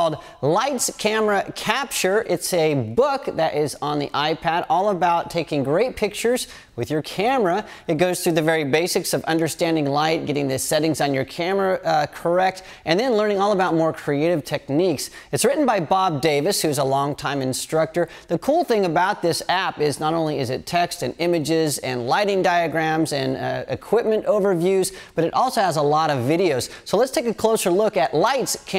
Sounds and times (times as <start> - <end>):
Speech: 0.0 - 28.7.